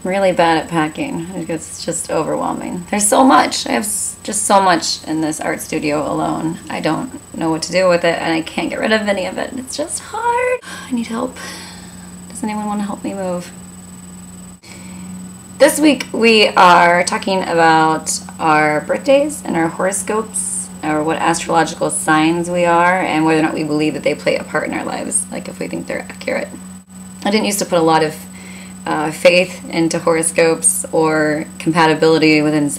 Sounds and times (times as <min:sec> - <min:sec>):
Speech: 0:00.0 - 0:11.4, 0:12.3 - 0:13.5, 0:15.6 - 0:26.6, 0:27.2 - 0:32.7.